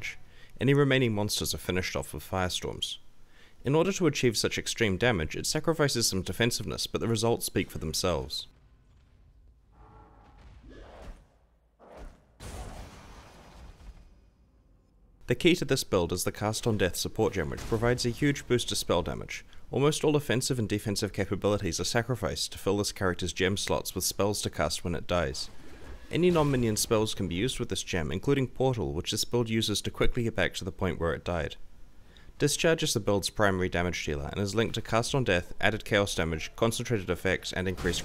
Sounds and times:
Speech: 0.0s - 3.0s, 3.6s - 8.5s, 15.3s - 25.5s, 26.1s - 31.6s, 32.4s - 38.0s.

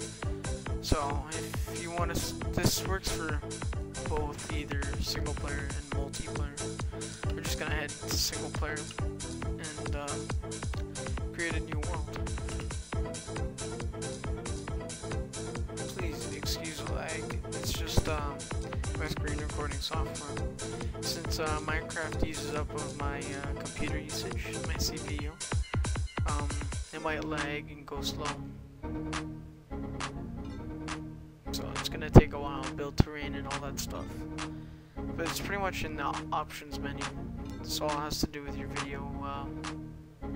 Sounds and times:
Music: 0.0s - 40.3s
Speech: 0.8s - 3.4s, 4.0s - 6.7s, 7.3s - 9.0s, 9.6s - 10.3s, 11.3s - 12.6s, 15.9s - 20.4s, 21.0s - 25.4s, 26.2s - 28.5s, 31.5s - 34.2s, 35.2s - 39.6s.

